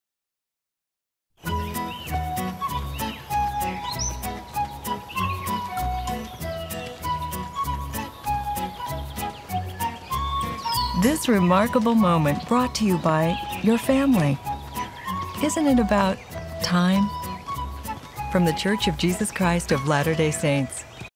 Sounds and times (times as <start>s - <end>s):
Music: 1.4s - 21.1s
Speech: 11.0s - 14.4s, 15.4s - 17.2s, 18.3s - 20.9s.